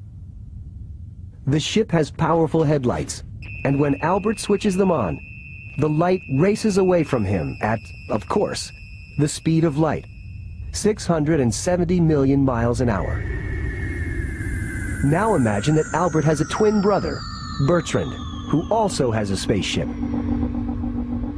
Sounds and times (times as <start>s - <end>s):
Speech: 1.5s - 5.2s, 5.8s - 10.0s, 10.8s - 13.2s, 15.0s - 19.9s.